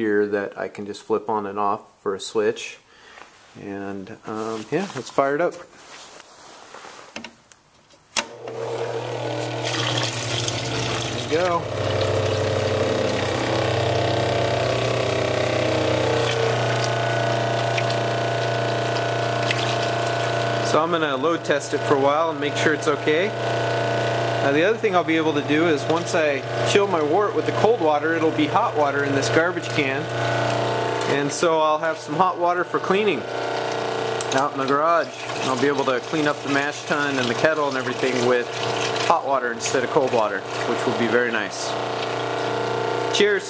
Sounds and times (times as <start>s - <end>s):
Pump (liquid): 8.3s - 43.4s
Water: 9.6s - 13.4s, 16.7s - 20.7s, 33.2s - 43.4s.